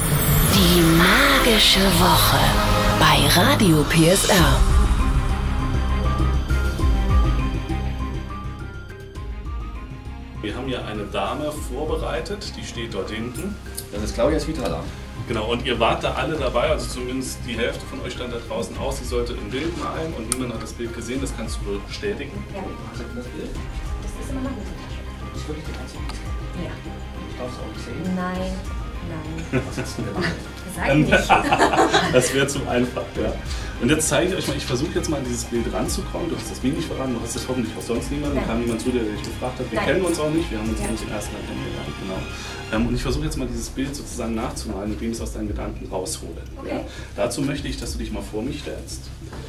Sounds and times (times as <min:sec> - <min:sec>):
Music: 0:00.0 - 0:49.4
Speech: 0:00.6 - 0:04.6, 0:32.1 - 0:49.1.